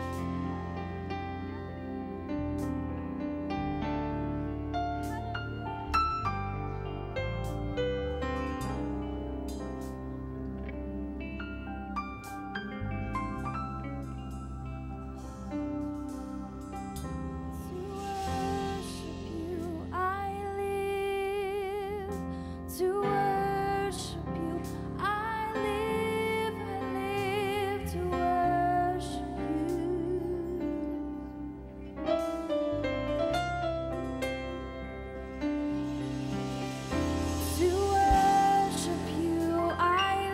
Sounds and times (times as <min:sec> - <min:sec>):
Music: 0:00.0 - 0:40.3.